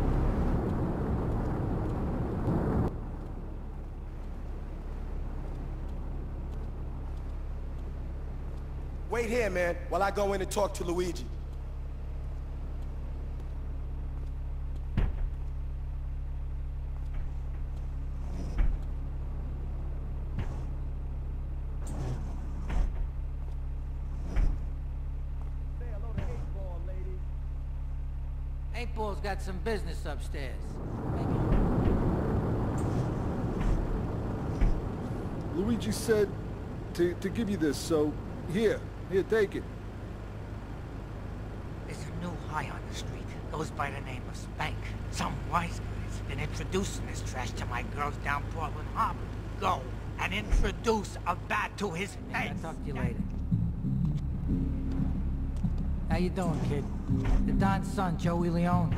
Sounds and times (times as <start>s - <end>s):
Speech: 9.1s - 11.3s, 25.8s - 27.2s, 28.7s - 31.4s, 35.5s - 36.4s, 37.0s - 39.6s, 41.9s - 53.2s, 56.1s - 58.9s.